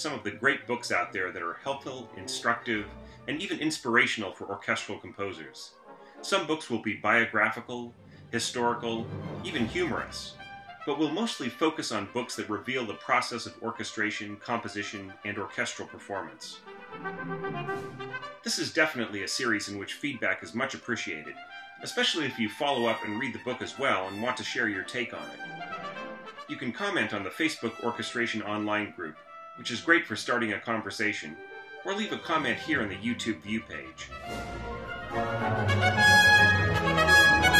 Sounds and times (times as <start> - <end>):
Speech: 0.0 - 10.3, 10.9 - 16.6, 18.5 - 25.3, 26.5 - 34.1.